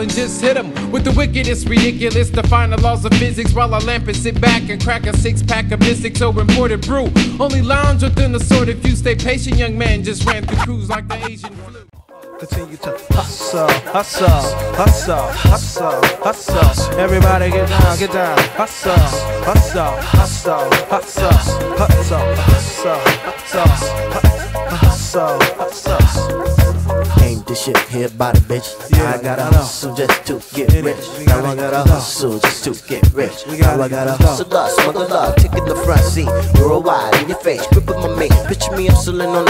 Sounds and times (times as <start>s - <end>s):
Hip hop music: 0.0s - 39.4s
Funk: 0.8s - 11.8s, 12.5s - 39.4s.